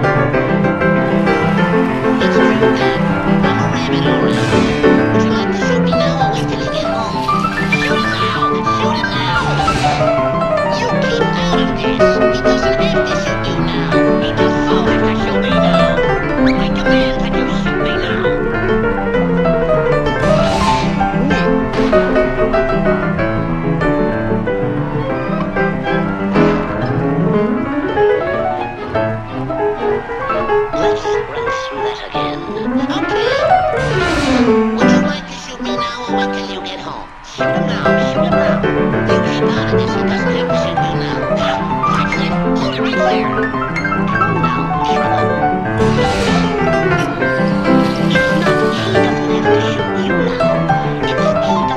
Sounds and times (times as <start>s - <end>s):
Electric guitar: 0.0s - 51.7s
Speech: 1.0s - 18.6s, 20.2s - 23.0s, 25.0s - 27.3s, 28.2s - 51.7s.